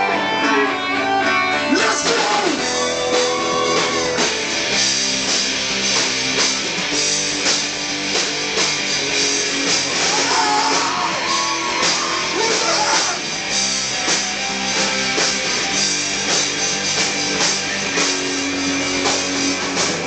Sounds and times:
Music: 0.0s - 20.0s
Speech: 1.7s - 2.6s, 12.4s - 13.2s.

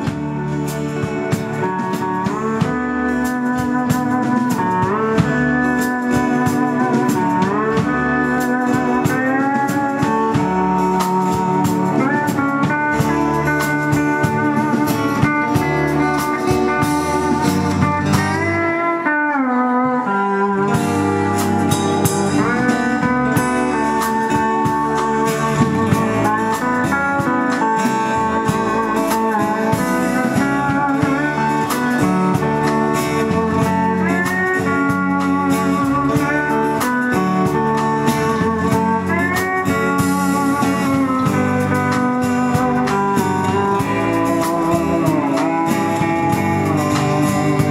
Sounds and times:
Musical instrument: 0.0s - 47.7s.

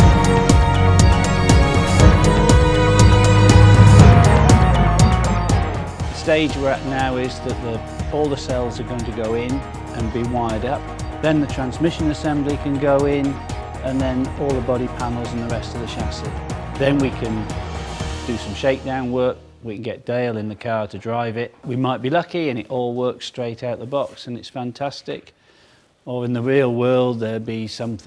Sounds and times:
Music: 0.0s - 19.9s
Speech: 6.2s - 17.5s, 18.3s - 25.3s, 26.1s - 28.0s.

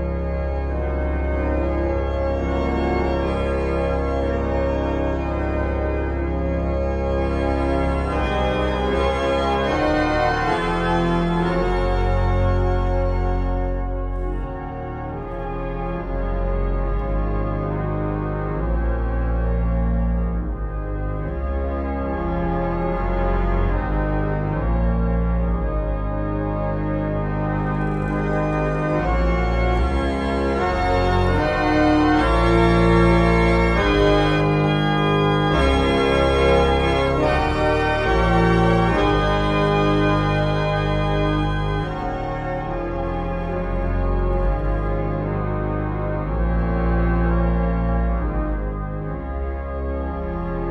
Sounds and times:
Hammond organ: 0.0s - 50.7s.

